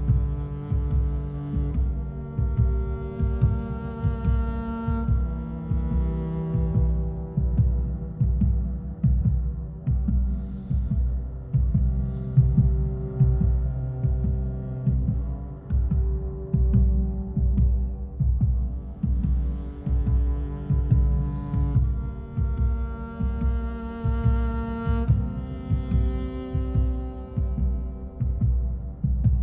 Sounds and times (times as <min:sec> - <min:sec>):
Music: 0:00.0 - 0:29.4.